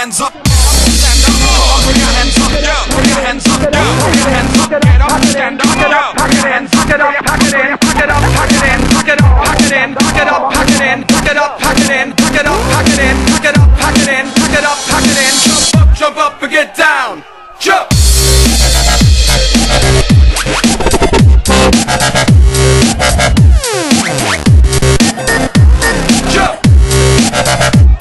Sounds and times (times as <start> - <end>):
Dubstep: 0.0 - 16.1, 17.9 - 28.0.